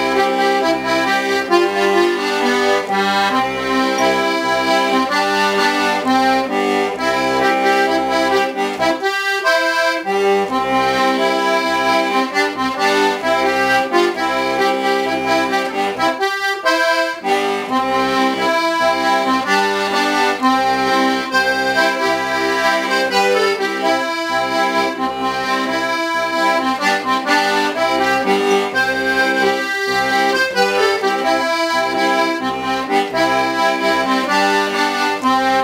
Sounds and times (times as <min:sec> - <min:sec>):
Accordion: 0:00.0 - 0:35.6.